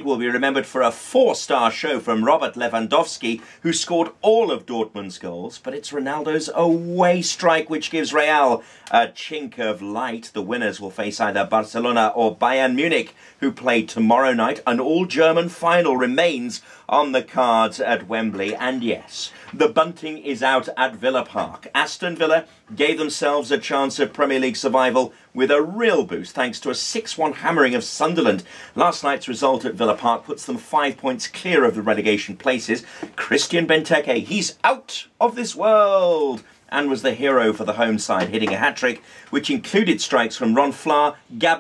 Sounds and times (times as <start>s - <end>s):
Speech: 0.0s - 41.6s.